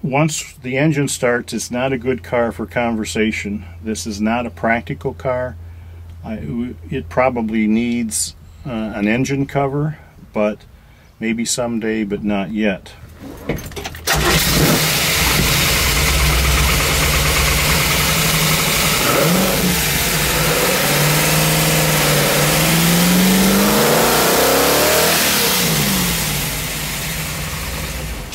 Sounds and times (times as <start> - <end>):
Medium engine (mid frequency): 1.8 - 9.1, 13.0 - 28.3
Car: 13.0 - 28.3.